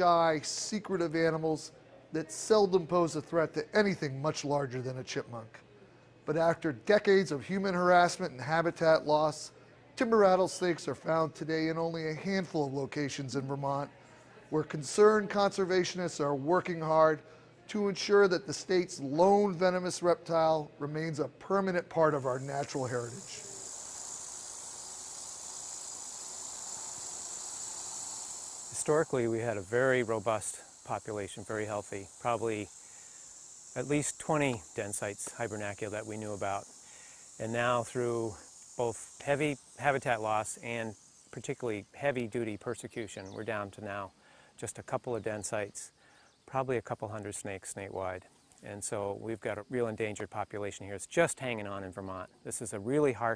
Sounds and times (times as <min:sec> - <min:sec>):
Speech: 0:00.0 - 0:05.6, 0:06.3 - 0:23.4, 0:28.8 - 0:32.7, 0:33.8 - 0:36.6, 0:37.4 - 0:45.9, 0:46.5 - 0:53.3.